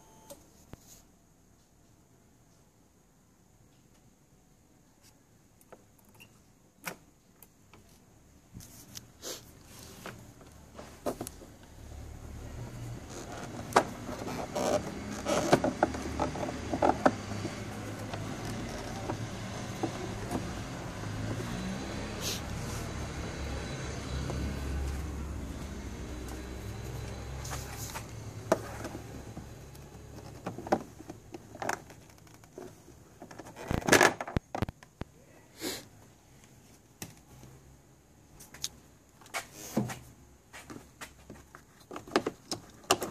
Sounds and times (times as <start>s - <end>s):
Vehicle: 9.0s - 43.1s
Engine: 11.8s - 31.2s.